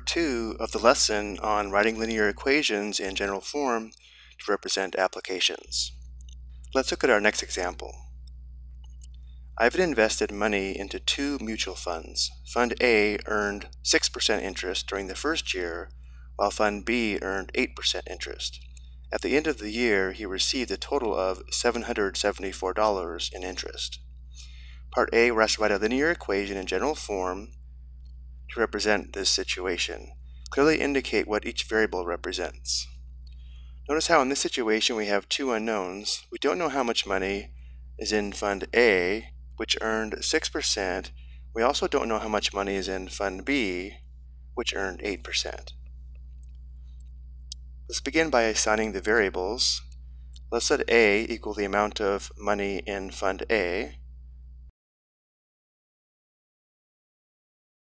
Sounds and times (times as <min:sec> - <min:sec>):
Speech: 0:00.0 - 0:05.9, 0:06.8 - 0:08.0, 0:09.6 - 0:24.0, 0:25.0 - 0:27.5, 0:28.5 - 0:32.9, 0:33.9 - 0:44.0, 0:44.6 - 0:45.7, 0:47.9 - 0:49.8, 0:50.5 - 0:53.9.